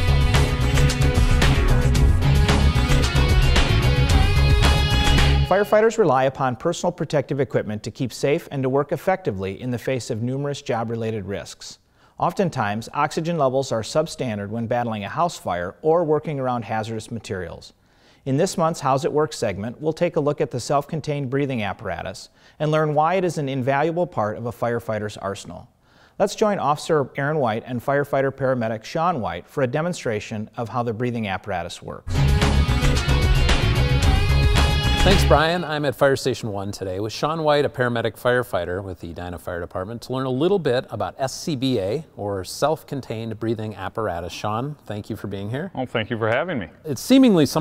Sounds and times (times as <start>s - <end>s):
Speech: 5.5s - 32.0s, 35.1s - 47.6s.